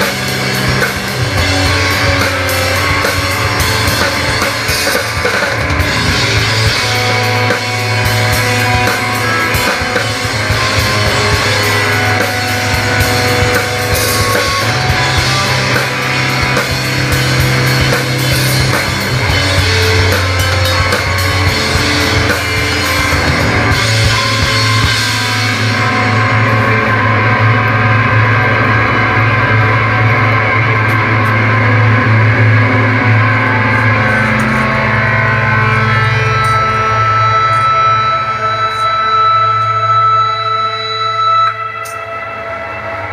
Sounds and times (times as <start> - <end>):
Drum: 0.0 - 38.8
Guitar: 0.0 - 43.1
Punk rock: 0.0 - 43.1.